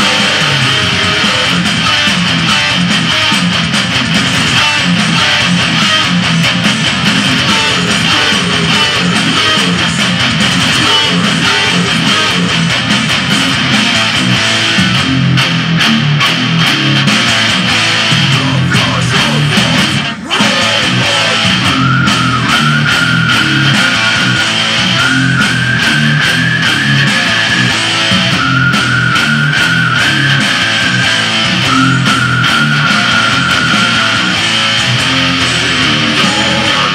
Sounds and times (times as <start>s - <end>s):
Music: 0.0s - 36.9s.